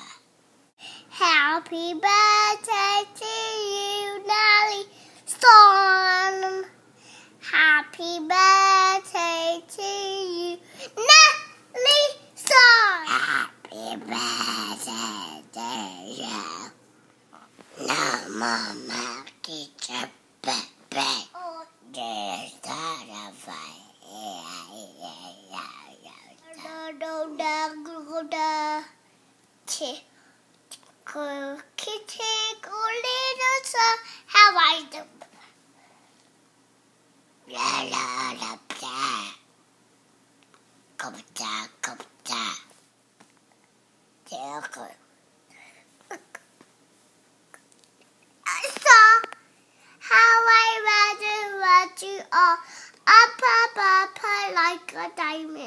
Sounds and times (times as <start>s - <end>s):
Inside, small room: 0.0s - 55.6s
Child speech, kid speaking: 1.2s - 6.7s, 7.4s - 16.8s, 17.8s - 29.0s, 29.7s - 30.1s, 31.1s - 35.3s, 37.5s - 39.4s, 41.0s - 42.7s, 44.2s - 45.1s, 48.5s - 49.4s, 50.0s - 55.6s.